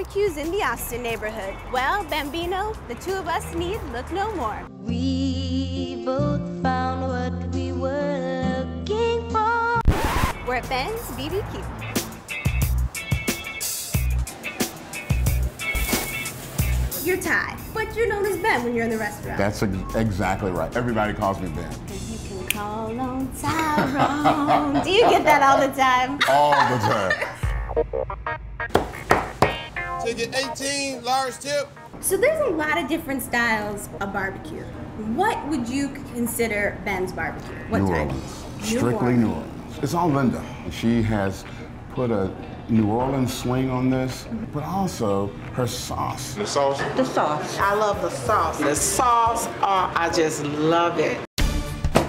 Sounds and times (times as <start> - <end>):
Music: 0.0 - 26.0, 26.6 - 34.0, 51.4 - 52.0.